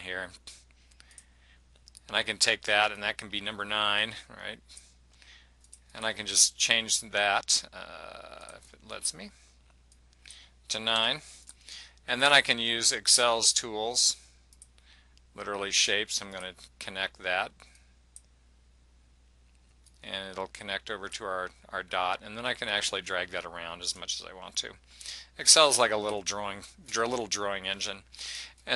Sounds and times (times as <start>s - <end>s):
Speech: 0.0s - 0.5s, 2.0s - 4.6s, 5.9s - 9.4s, 10.7s - 11.3s, 12.1s - 14.2s, 15.4s - 17.6s, 20.0s - 24.8s, 25.4s - 28.7s.